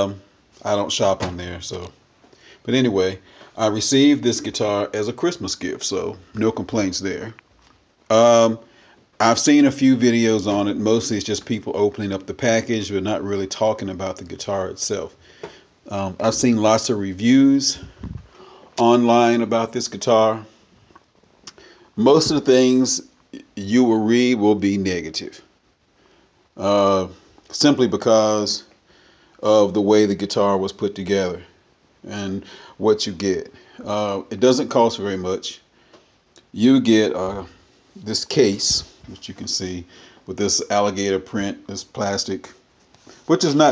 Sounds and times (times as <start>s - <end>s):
Speech: 0.0s - 2.0s, 2.7s - 7.4s, 8.1s - 15.2s, 15.9s - 18.1s, 18.8s - 20.5s, 22.0s - 25.5s, 26.6s - 28.7s, 29.4s - 35.7s, 36.4s - 42.6s, 43.3s - 43.7s.